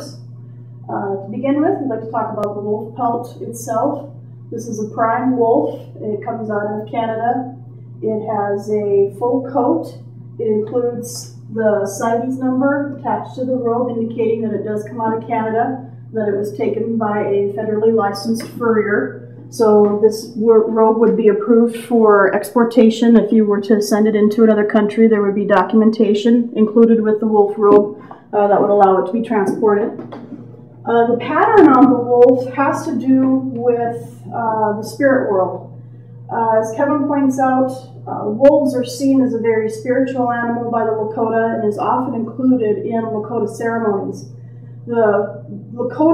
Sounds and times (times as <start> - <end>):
Speech: 0.0 - 0.2, 0.8 - 46.1.